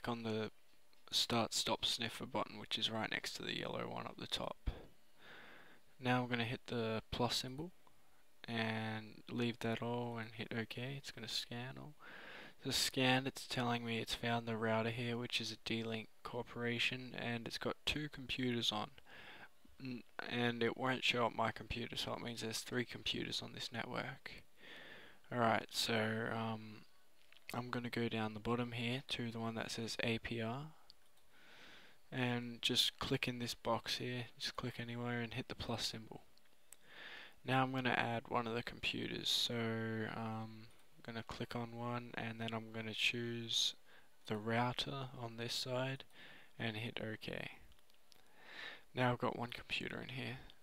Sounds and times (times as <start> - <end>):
Speech: 0.0 - 4.9, 6.0 - 7.8, 8.4 - 12.0, 12.6 - 19.0, 19.8 - 24.5, 25.3 - 26.9, 27.5 - 30.9, 32.1 - 36.3, 37.4 - 47.7, 48.9 - 50.6.